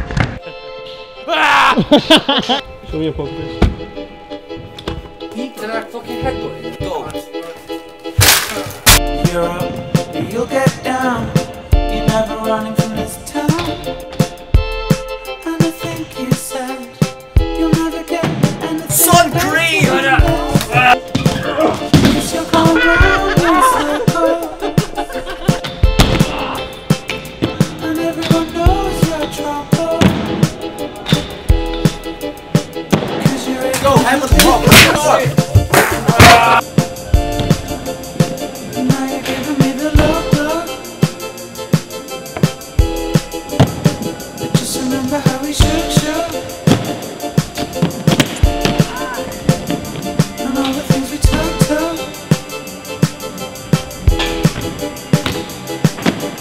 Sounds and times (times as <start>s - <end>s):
Music: 0.0s - 56.4s.